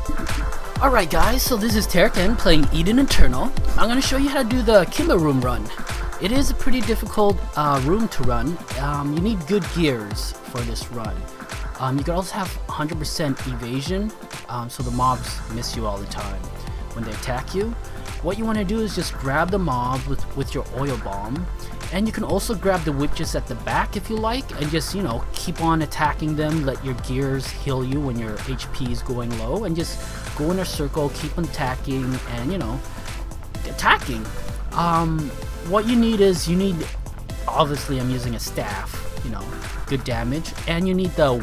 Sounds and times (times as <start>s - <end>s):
Music: 0.0s - 41.4s
Speech: 0.8s - 11.2s, 11.8s - 32.8s, 33.6s - 41.4s.